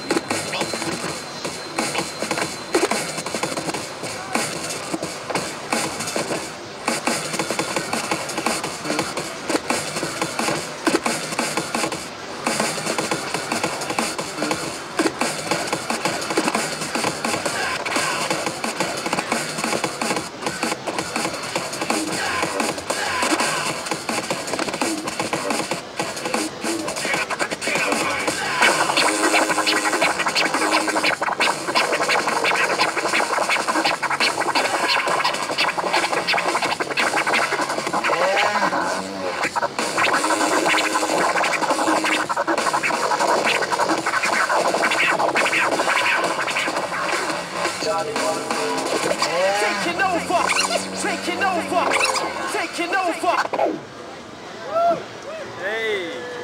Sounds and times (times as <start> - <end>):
Scratching (performance technique): 0.0 - 53.8
Electronic music: 0.0 - 53.9
Speech: 47.8 - 53.5, 54.8 - 56.4.